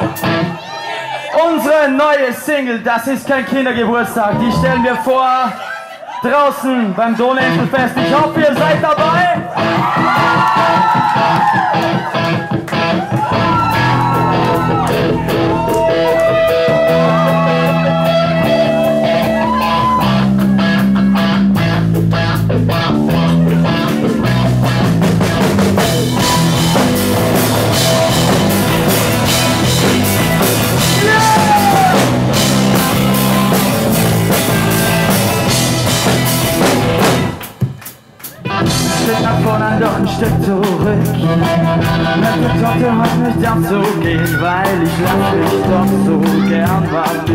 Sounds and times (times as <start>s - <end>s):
Exciting music: 10.8s - 45.9s.